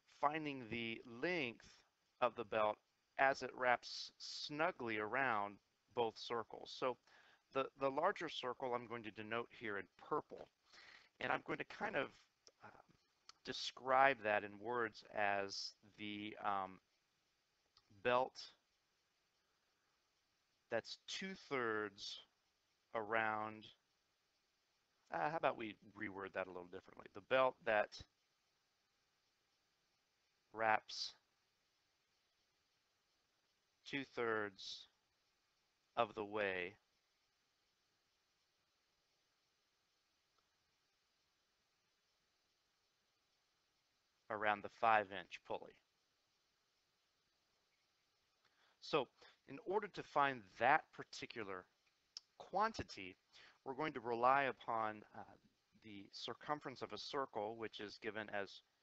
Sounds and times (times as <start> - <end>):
Speech: 0.1 - 10.6, 11.2 - 16.8, 18.0 - 18.6, 20.7 - 22.3, 22.9 - 23.8, 25.1 - 28.1, 30.6 - 31.3, 33.8 - 35.0, 36.0 - 36.8, 44.3 - 45.9, 48.8 - 58.7.